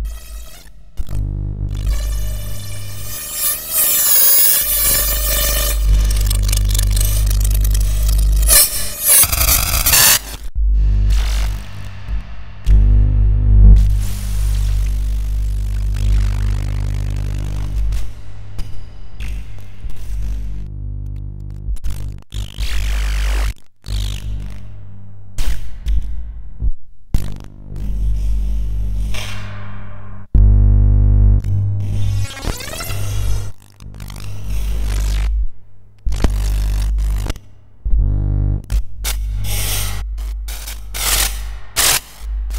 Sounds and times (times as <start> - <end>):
Static: 0.0 - 25.1, 30.0 - 38.8, 39.4 - 42.5
Hum: 0.0 - 42.5.